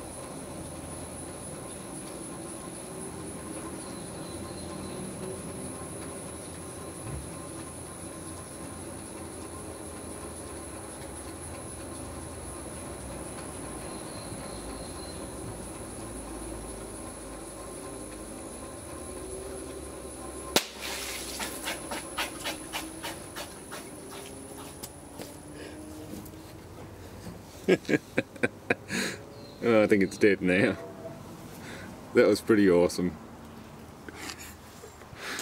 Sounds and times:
Outside, rural or natural: 0.0s - 30.8s, 31.4s - 35.4s.

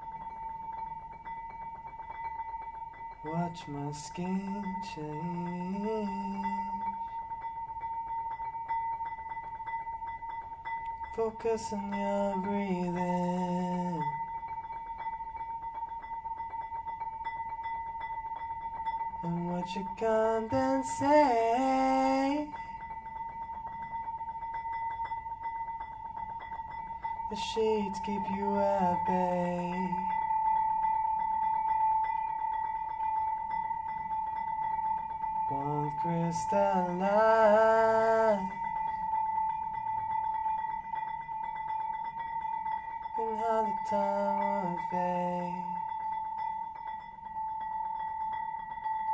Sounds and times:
Glockenspiel: 0.0s - 49.1s
Marimba, xylophone: 0.0s - 49.1s.

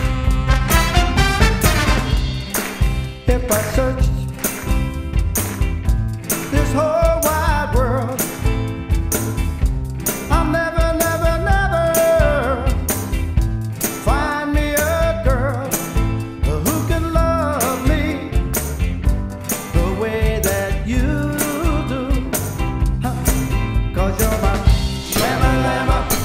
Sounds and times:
Music: 0.0s - 26.2s.

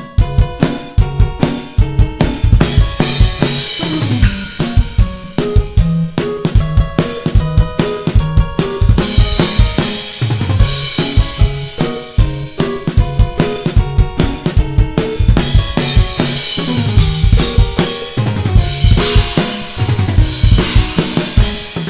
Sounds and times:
Drum kit: 0.0s - 21.9s
Bass drum: 0.2s - 21.7s.

